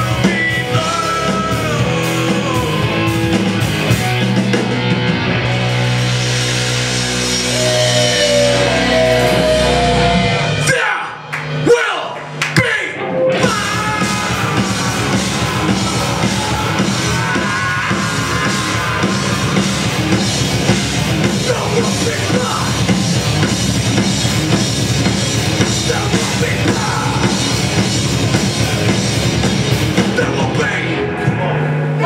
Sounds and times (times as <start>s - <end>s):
Heavy metal: 0.0s - 32.0s.